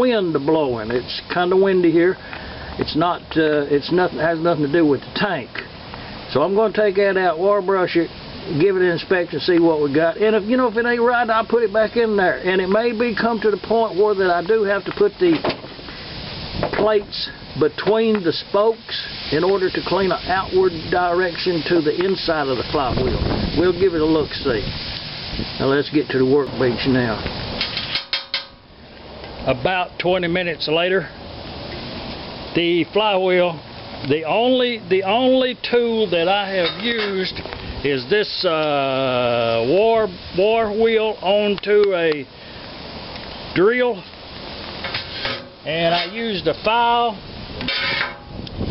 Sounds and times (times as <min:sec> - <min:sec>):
Speech: 0:00.0 - 0:02.2, 0:02.8 - 0:05.7, 0:06.3 - 0:15.6, 0:16.7 - 0:24.7, 0:25.6 - 0:27.3, 0:29.4 - 0:31.2, 0:32.5 - 0:42.3, 0:43.6 - 0:44.1, 0:45.6 - 0:47.2.